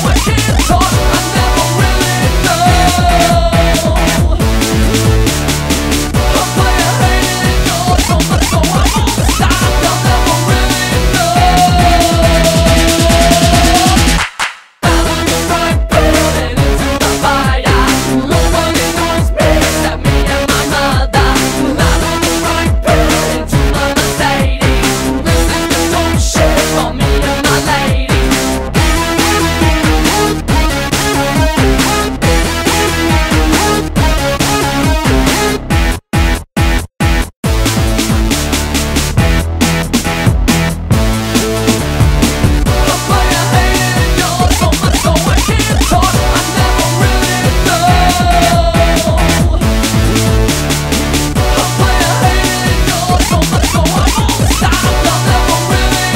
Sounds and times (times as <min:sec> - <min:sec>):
Music: 0:00.0 - 0:56.1.